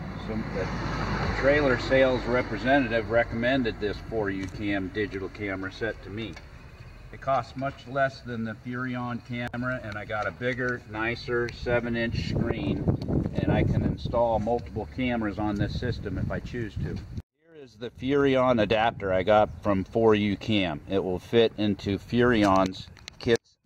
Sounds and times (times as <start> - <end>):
Speech: 0.2 - 0.7, 1.4 - 6.4, 7.2 - 12.8, 13.4 - 23.5.